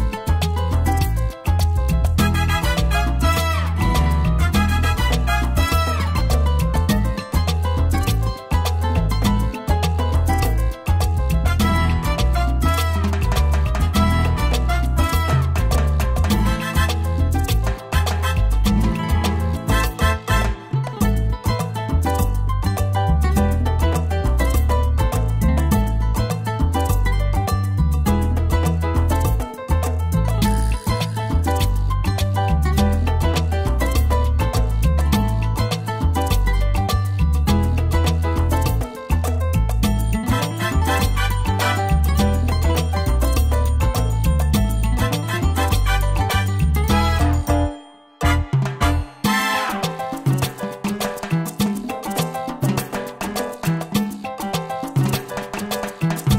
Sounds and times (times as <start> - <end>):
Music: 0.0 - 56.3.